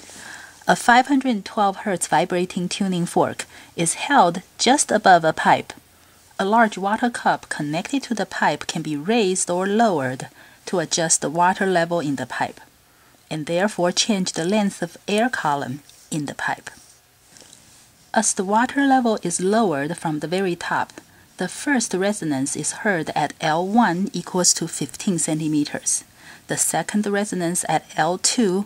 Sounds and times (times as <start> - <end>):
Speech: 0.7 - 5.8, 6.4 - 12.7, 13.3 - 16.8, 18.2 - 28.6.